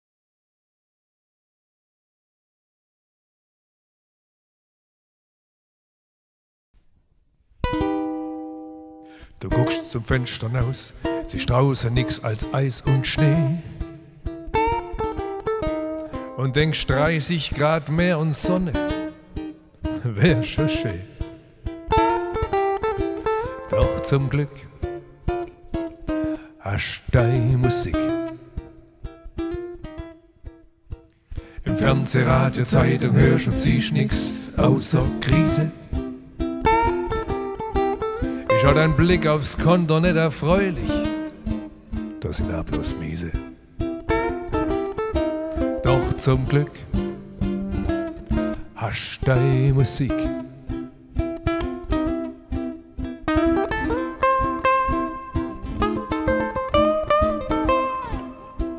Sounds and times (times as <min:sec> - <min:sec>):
Ukulele: 0:06.8 - 0:58.7.